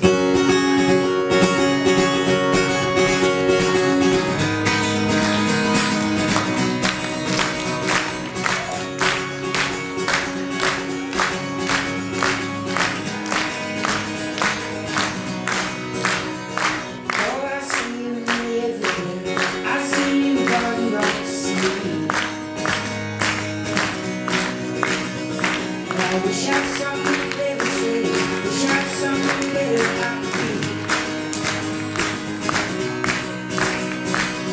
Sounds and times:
Music: 0:00.0 - 0:34.5.

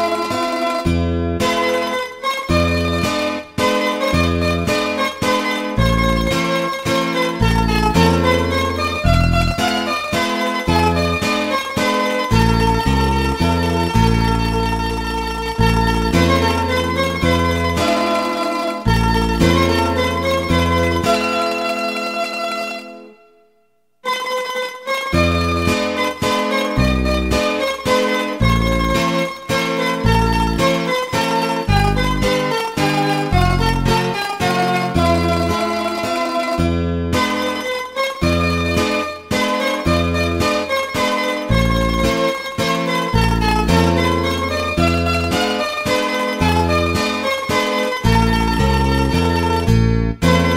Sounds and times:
Folk music: 0:00.0 - 0:23.2, 0:24.1 - 0:50.5.

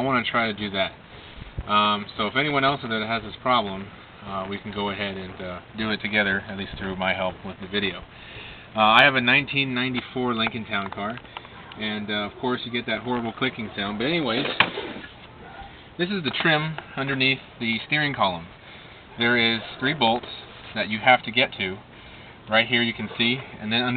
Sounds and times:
Speech: 0:00.0 - 0:01.0, 0:01.7 - 0:08.1, 0:08.8 - 0:11.2, 0:11.8 - 0:14.6, 0:16.0 - 0:18.5, 0:19.2 - 0:21.8, 0:22.5 - 0:23.9.

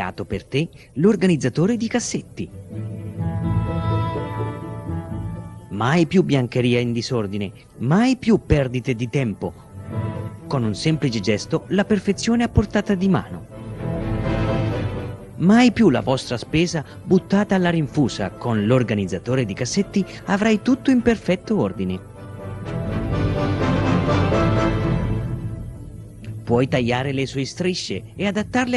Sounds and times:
Speech: 0:00.0 - 0:02.5, 0:05.8 - 0:09.5, 0:10.5 - 0:13.4, 0:15.4 - 0:22.0, 0:26.4 - 0:28.7
Music: 0:00.0 - 0:28.7.

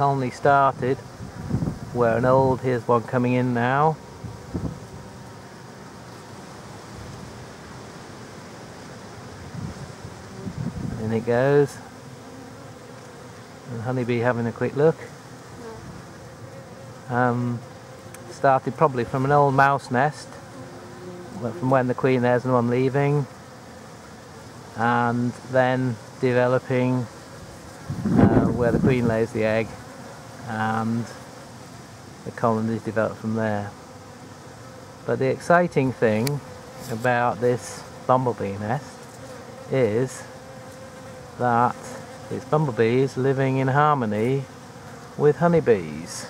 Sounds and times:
Bee, wasp, etc.: 0:00.0 - 0:46.2
Fly, housefly: 0:00.0 - 0:46.2.

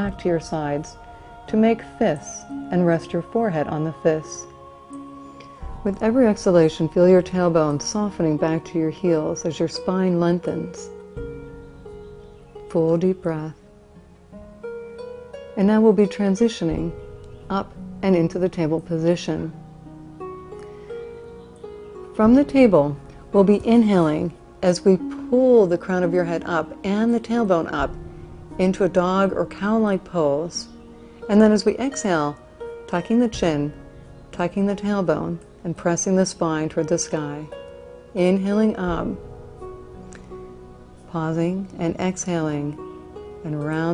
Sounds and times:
Speech: 0:00.0 - 0:04.5, 0:05.9 - 0:10.9, 0:12.7 - 0:13.6, 0:15.6 - 0:16.9, 0:17.5 - 0:19.5, 0:22.2 - 0:27.9, 0:28.6 - 0:30.7, 0:31.3 - 0:33.8, 0:34.4 - 0:37.5, 0:38.2 - 0:39.2, 0:41.1 - 0:42.8, 0:43.5 - 0:43.9
Music: 0:00.0 - 0:43.9.

